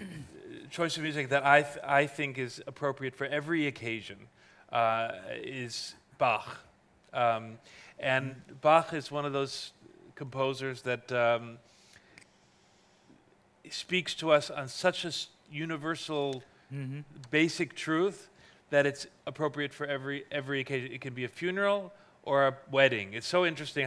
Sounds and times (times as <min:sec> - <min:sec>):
Speech: 0:00.0 - 0:11.6, 0:13.7 - 0:23.8.